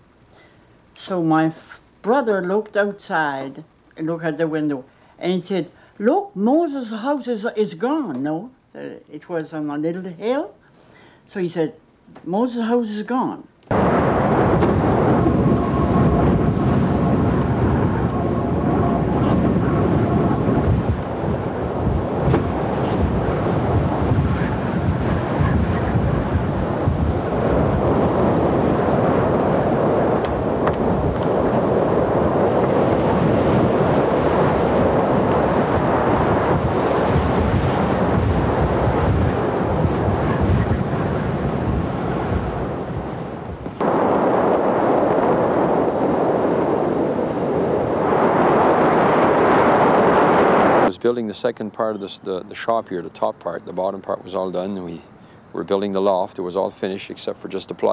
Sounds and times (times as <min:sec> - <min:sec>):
Outside, rural or natural: 0:12.8 - 0:57.9.